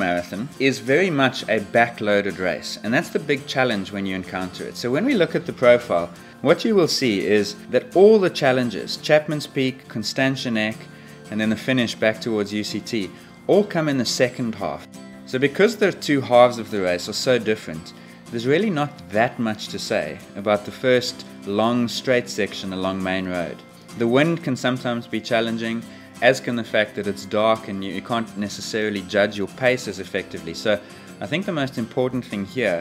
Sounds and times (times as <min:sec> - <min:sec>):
Music: 0:00.0 - 0:32.8
Speech: 0:00.0 - 0:32.8.